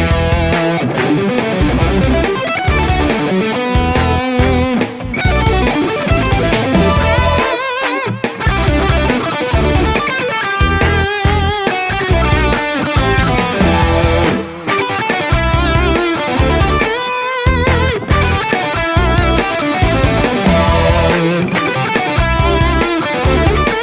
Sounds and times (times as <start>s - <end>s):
Techno: 0.0s - 23.8s.